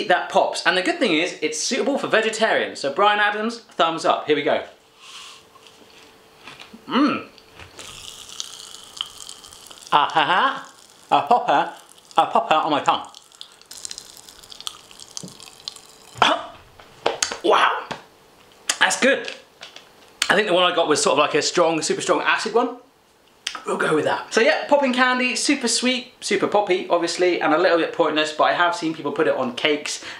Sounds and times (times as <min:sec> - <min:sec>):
Speech: 0:00.0 - 0:04.8, 0:10.0 - 0:13.1, 0:16.2 - 0:16.6, 0:17.4 - 0:18.0, 0:18.7 - 0:19.4, 0:20.2 - 0:22.9, 0:23.5 - 0:30.0
Inside, small room: 0:00.0 - 0:30.1.